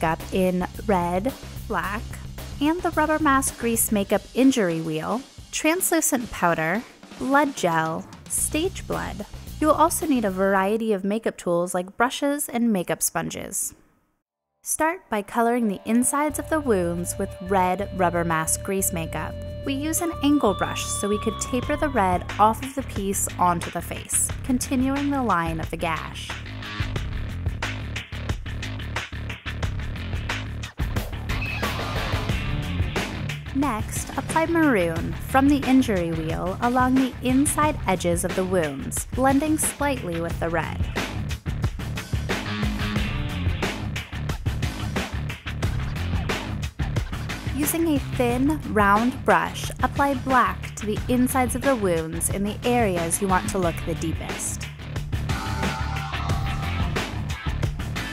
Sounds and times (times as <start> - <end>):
Music: 0.0 - 11.4, 14.4 - 58.1
Speech: 0.0 - 13.8, 14.7 - 26.4, 33.6 - 41.0, 47.6 - 54.6.